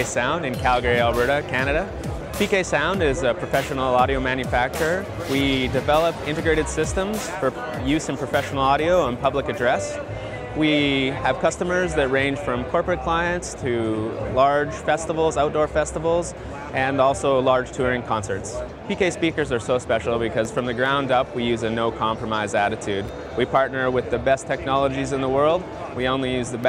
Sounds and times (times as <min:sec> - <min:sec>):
Music: 0:00.0 - 0:26.6
Speech: 0:00.0 - 0:26.6.